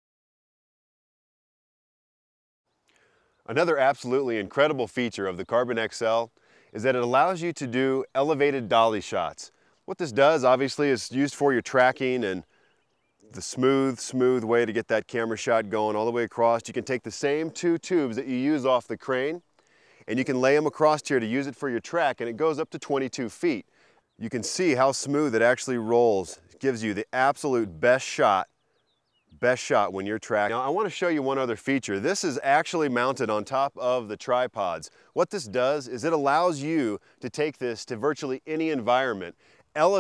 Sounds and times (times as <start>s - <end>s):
Speech: 3.5s - 12.5s, 13.3s - 19.4s, 20.1s - 23.6s, 24.2s - 28.5s, 29.4s - 40.0s.